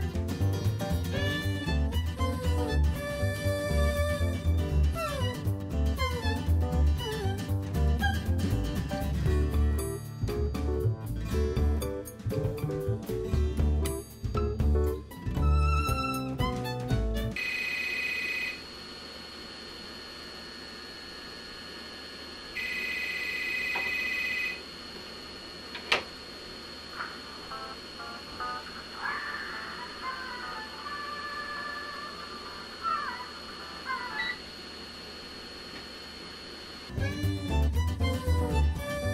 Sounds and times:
Music: 0:00.0 - 0:17.4, 0:29.6 - 0:31.9, 0:36.9 - 0:39.1.

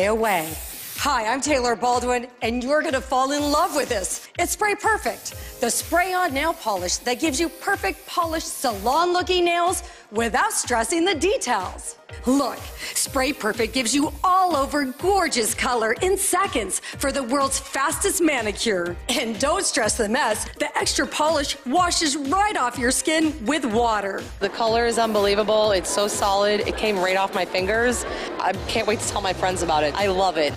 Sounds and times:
Music: 0:00.0 - 0:30.5
Speech: 0:00.0 - 0:30.5.

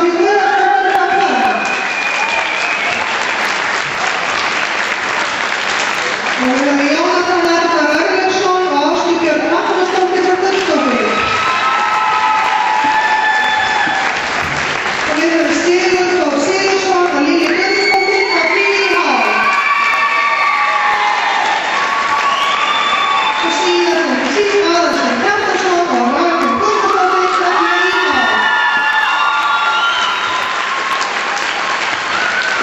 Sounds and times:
Applause: 0:00.7 - 0:07.8, 0:09.9 - 0:25.7, 0:26.4 - 0:32.6.

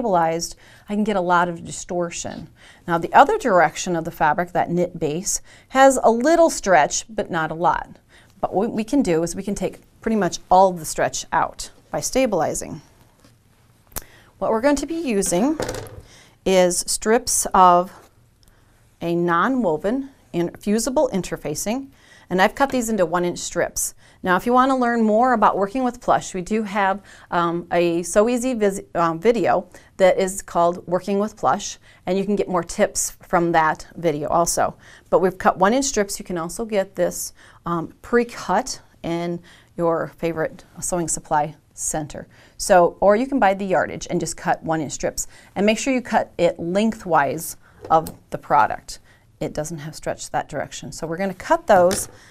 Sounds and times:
Speech: 0:00.0 - 0:12.9, 0:14.4 - 0:15.7, 0:16.5 - 0:18.1, 0:19.0 - 0:52.2.

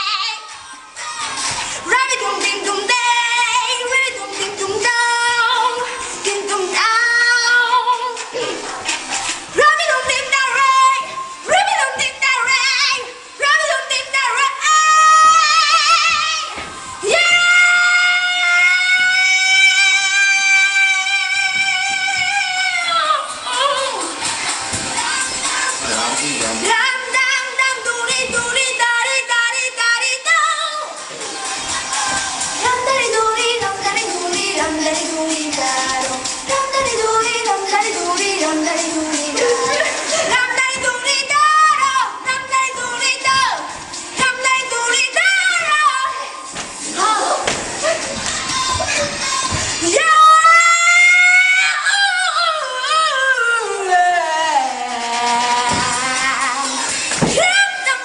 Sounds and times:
Music: 0:00.0 - 0:58.0.

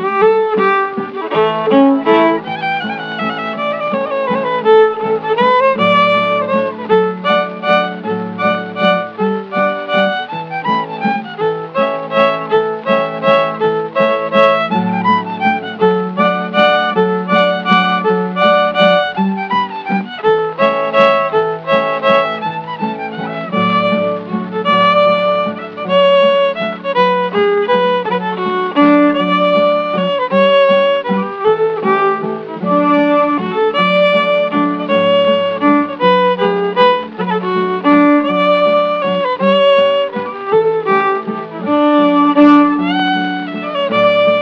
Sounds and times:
Violin, fiddle: 0:00.0 - 0:44.4.

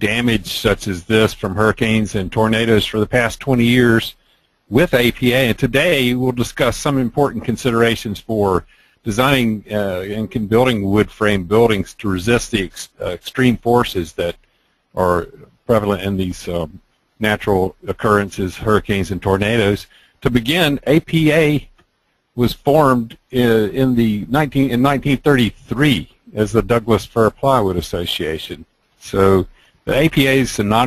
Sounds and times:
Speech: 0:00.0 - 0:14.4, 0:15.0 - 0:21.7, 0:22.4 - 0:30.8.

